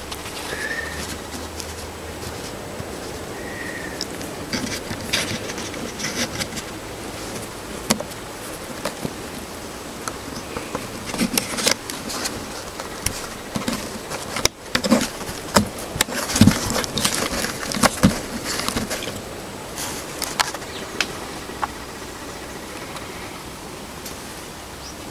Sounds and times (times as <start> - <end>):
Rustling leaves: 0.0 - 25.1.